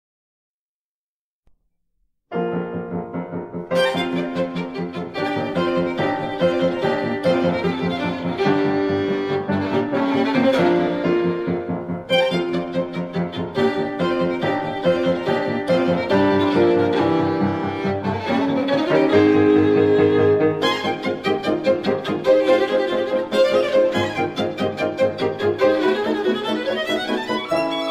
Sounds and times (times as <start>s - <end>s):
Violin, fiddle: 3.7s - 27.9s.